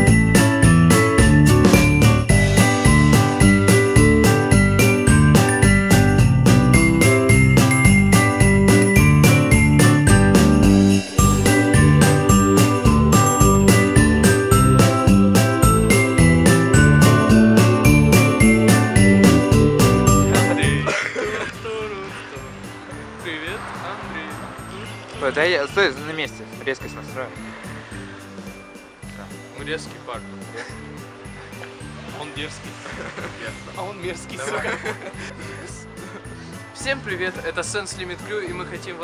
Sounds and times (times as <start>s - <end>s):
Electronic music: 0.0s - 20.9s.